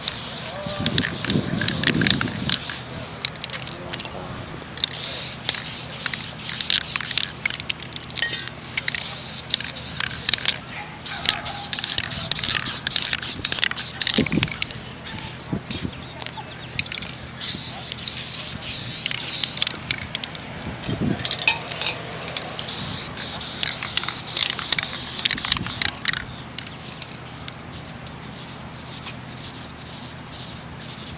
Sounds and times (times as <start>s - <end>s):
Spray: 0.0s - 2.8s, 4.9s - 7.3s, 8.9s - 14.5s, 17.4s - 19.8s, 22.6s - 26.0s, 27.7s - 31.1s.